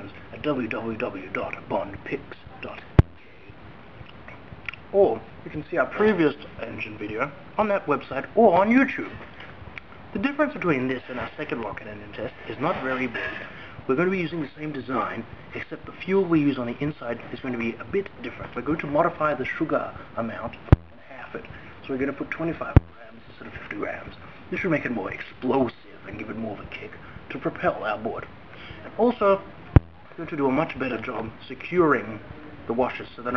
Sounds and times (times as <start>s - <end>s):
Speech: 0.0s - 3.6s, 4.7s - 9.4s, 10.1s - 33.3s.